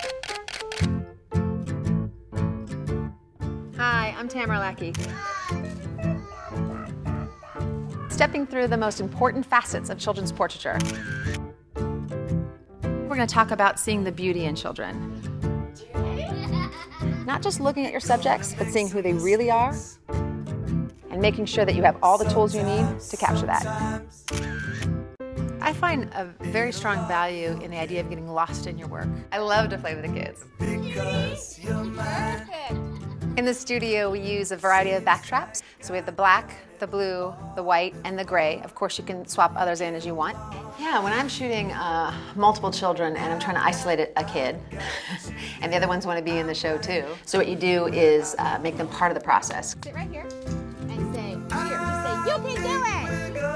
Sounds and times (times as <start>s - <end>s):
Music: 0.0s - 53.5s.